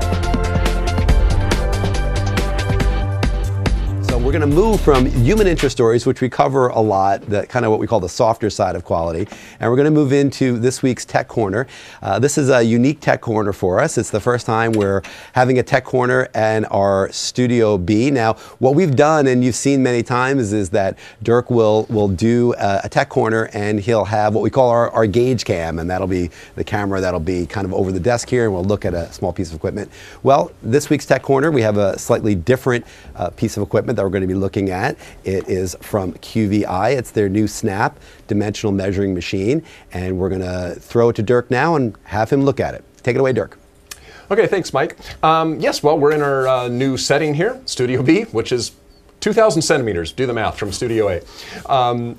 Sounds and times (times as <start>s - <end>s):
Speech: 4.1s - 43.6s, 44.3s - 52.1s.